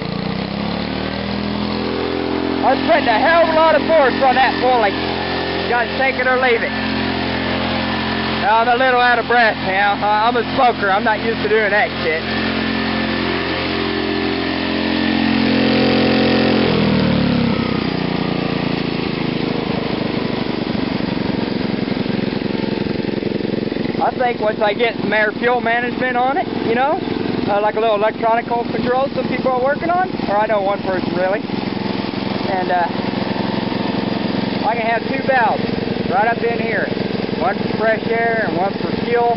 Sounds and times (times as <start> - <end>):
Idling: 0.0 - 39.3
Speech: 2.6 - 5.0, 5.6 - 6.8, 8.4 - 12.2, 24.0 - 31.4, 32.5 - 33.0, 34.6 - 39.3.